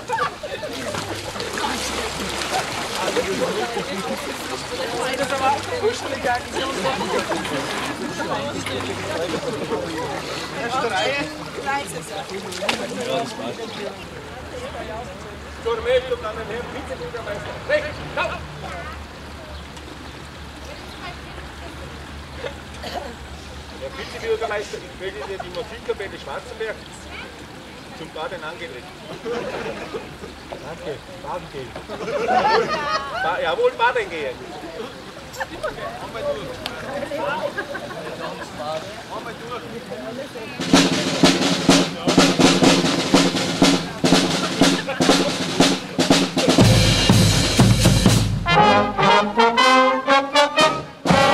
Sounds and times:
Stream: 0.0 - 47.8.

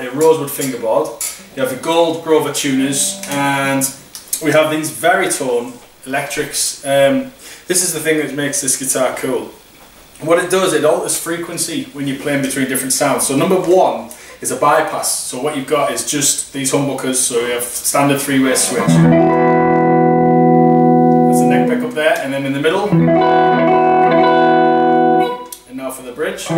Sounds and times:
Speech: 0.0 - 9.6, 10.2 - 19.1, 21.3 - 23.0, 25.6 - 26.5.

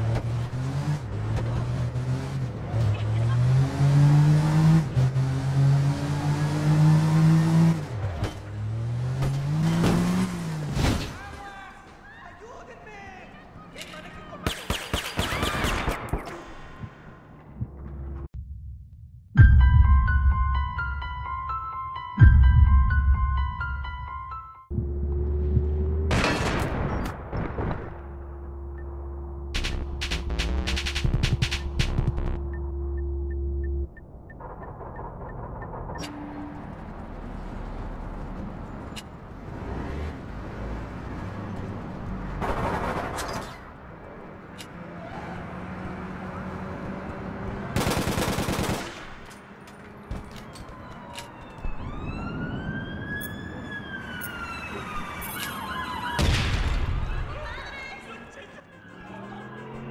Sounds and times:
Police car (siren): 50.1 - 57.4, 58.4 - 59.9
Ambulance (siren): 50.2 - 57.2, 58.4 - 59.9.

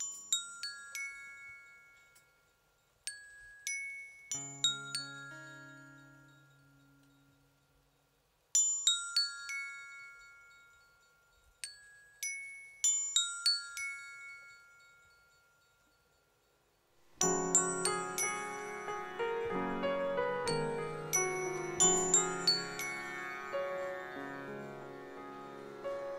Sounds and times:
Music: 0.0 - 16.3, 17.1 - 26.1.

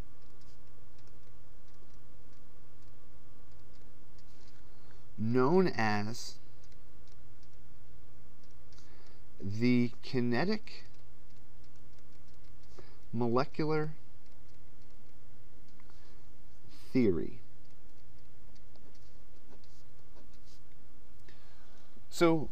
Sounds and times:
Speech: 5.2 - 6.4, 9.4 - 10.9, 13.1 - 14.0, 16.8 - 17.4, 22.1 - 22.5.

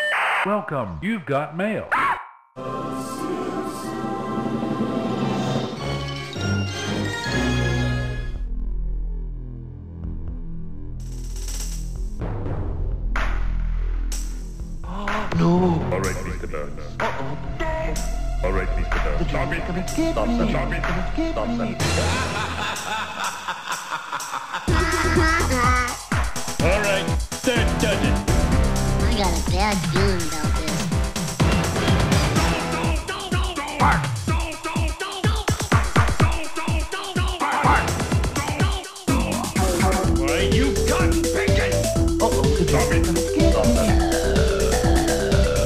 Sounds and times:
Speech: 0.5 - 1.9, 14.9 - 22.0, 26.6 - 28.1, 38.5 - 43.9.

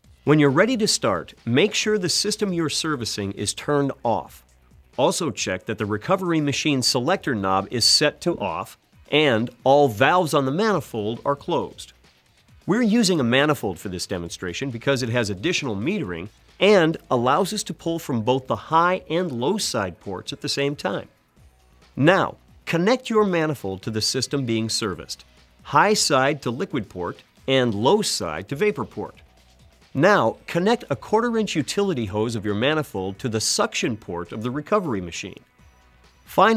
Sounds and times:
Speech: 0.3 - 4.4, 5.0 - 11.9, 12.7 - 21.1, 22.0 - 29.2, 30.0 - 35.4, 36.3 - 36.5.

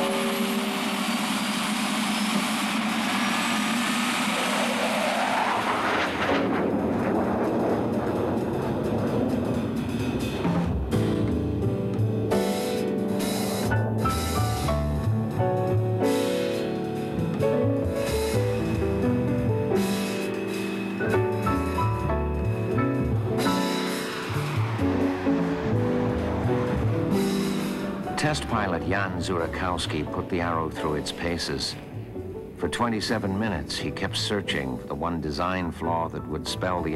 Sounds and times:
Music: 0.0 - 3.5, 6.1 - 36.9.

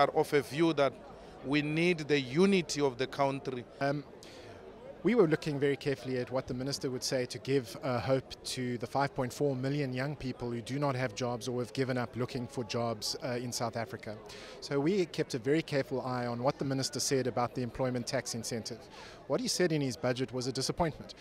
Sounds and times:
Male speech, man speaking: 0.0 - 4.1, 5.0 - 21.2.

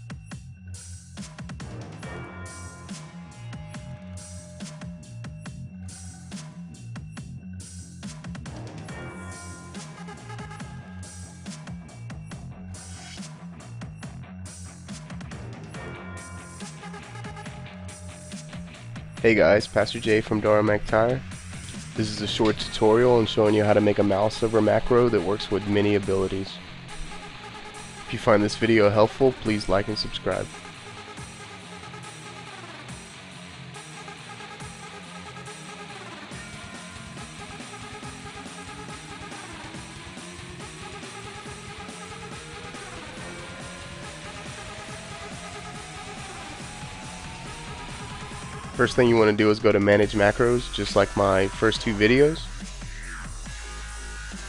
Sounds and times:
Music: 0.0 - 54.4
Speech: 19.2 - 21.2, 22.0 - 26.6, 28.1 - 30.5, 48.8 - 52.5.

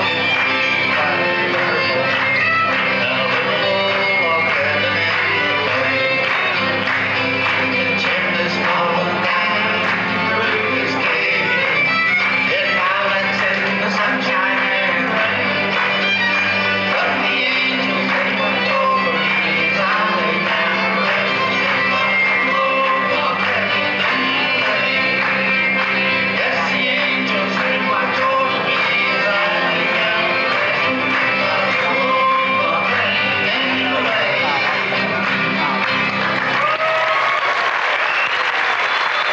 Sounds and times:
Inside, large room or hall: 0.0 - 39.3
Music: 0.0 - 39.3
Singing: 0.0 - 39.3.

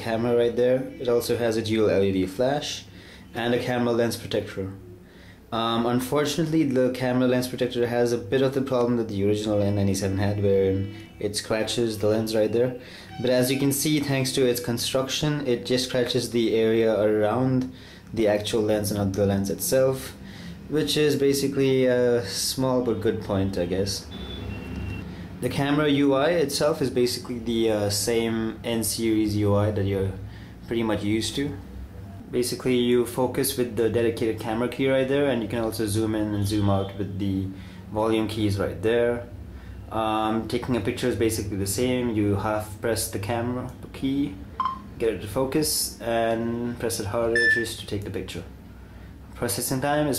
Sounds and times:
Speech: 0.0 - 4.8, 5.5 - 24.1, 25.4 - 31.6, 32.2 - 39.3, 39.9 - 44.4, 45.0 - 48.6, 49.4 - 50.1.

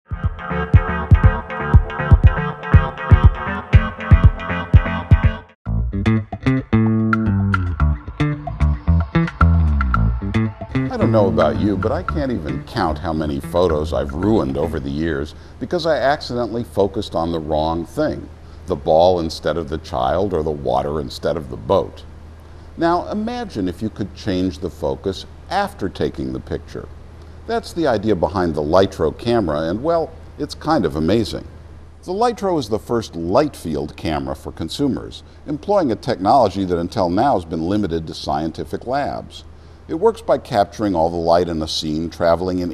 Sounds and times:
Bass guitar: 0.1 - 15.0.

